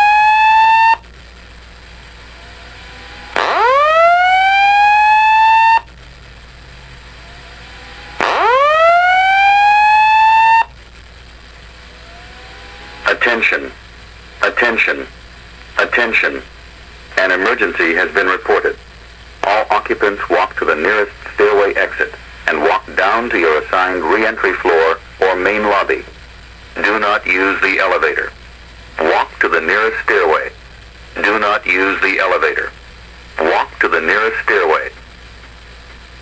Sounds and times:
Speech: 0:13.1 - 0:13.8, 0:14.4 - 0:15.2, 0:15.8 - 0:16.5, 0:17.2 - 0:18.8, 0:19.4 - 0:26.2, 0:26.8 - 0:28.4, 0:29.0 - 0:30.6, 0:31.2 - 0:32.8, 0:33.4 - 0:35.0.

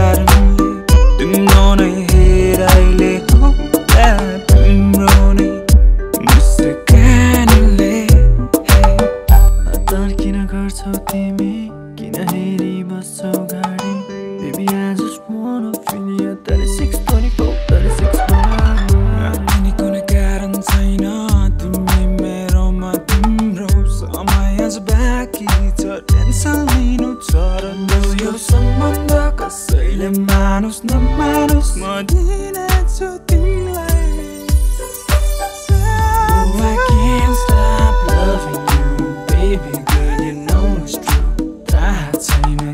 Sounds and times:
Music: 0:00.0 - 0:42.7
Singing: 0:14.5 - 0:21.3, 0:35.8 - 0:42.7.

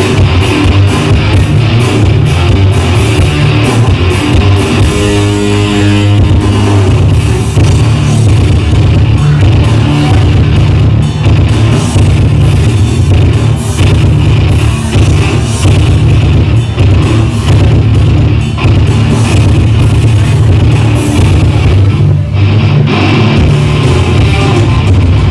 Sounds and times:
Heavy metal: 0:00.0 - 0:25.3.

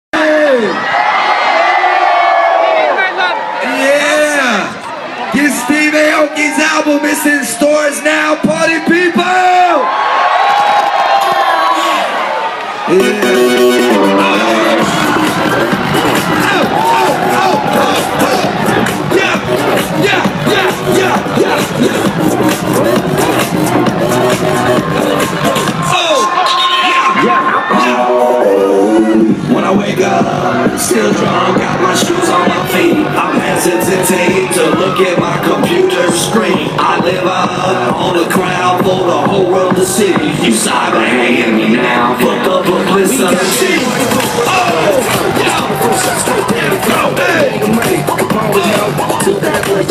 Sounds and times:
Crowd: 0:00.0 - 0:49.9
Cheering: 0:00.2 - 0:49.9.

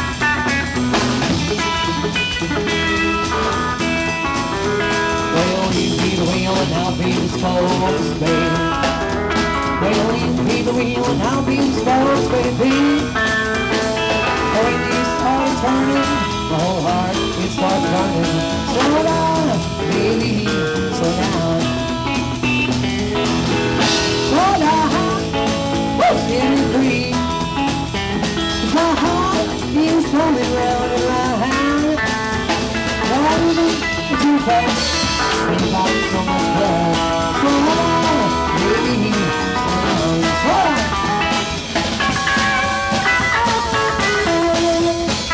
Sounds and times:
Music: 0:00.0 - 0:45.3.

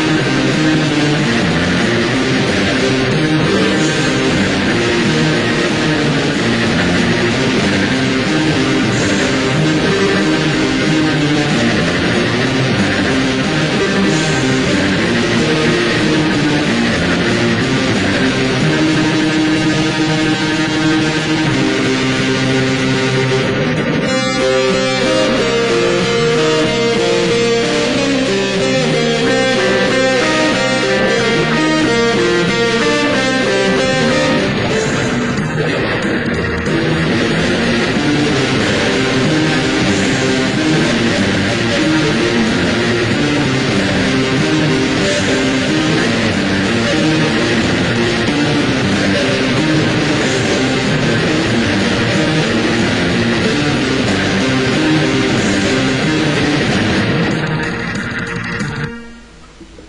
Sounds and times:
Heavy metal: 0:00.0 - 0:59.8.

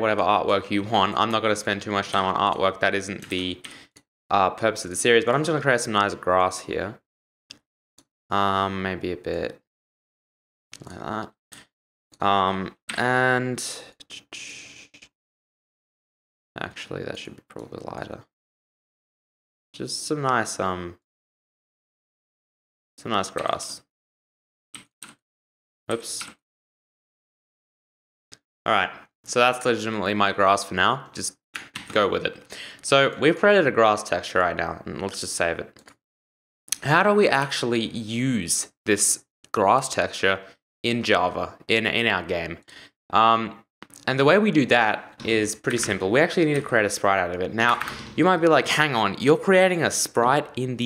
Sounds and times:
Speech: 0:00.0 - 0:03.7, 0:04.3 - 0:07.0, 0:08.3 - 0:09.6, 0:10.8 - 0:11.4, 0:12.2 - 0:15.0, 0:16.6 - 0:18.3, 0:19.8 - 0:21.0, 0:23.0 - 0:23.8, 0:25.9 - 0:26.3, 0:28.7 - 0:35.8, 0:36.8 - 0:50.8.

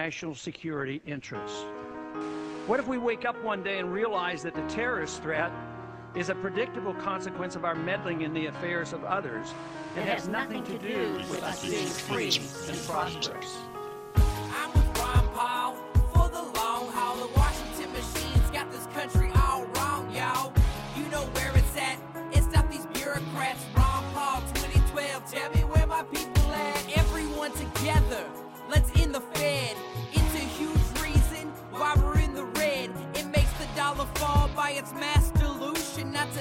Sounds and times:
Exciting music: 0:09.8 - 0:29.4
Pop music: 0:09.8 - 0:36.4.

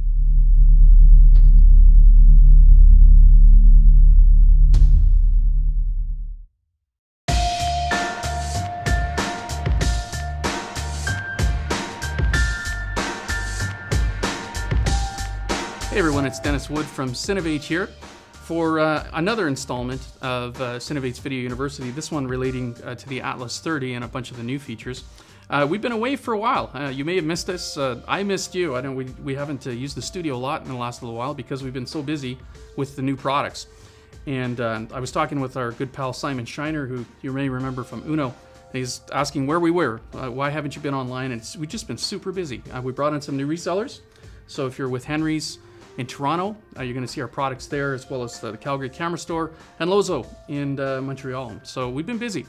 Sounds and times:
Music: 0:07.3 - 0:52.4
Speech: 0:15.9 - 0:33.7, 0:34.3 - 0:52.4.

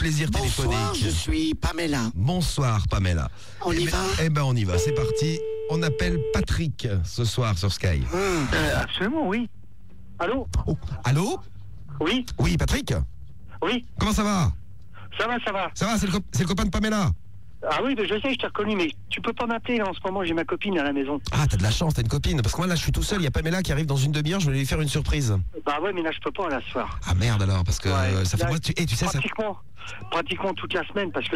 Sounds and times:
Speech: 0:00.0 - 0:09.5, 0:10.2 - 0:31.3
Radio: 0:04.6 - 0:06.4.

